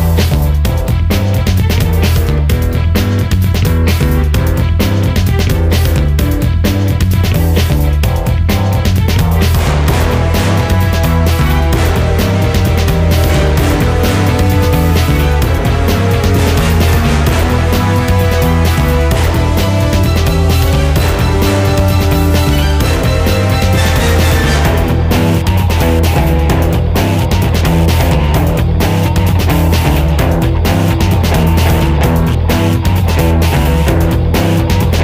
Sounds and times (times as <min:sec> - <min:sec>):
Music: 0:00.0 - 0:35.0.